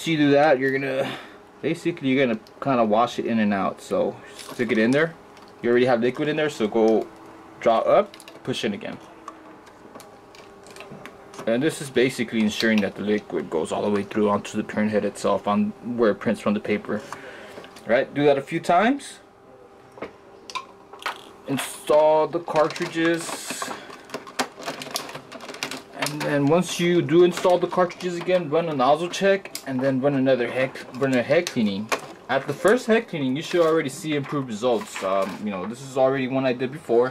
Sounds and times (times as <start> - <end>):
Speech: 0.0 - 9.1, 11.4 - 17.1, 17.8 - 19.3, 21.5 - 23.8, 25.9 - 37.1.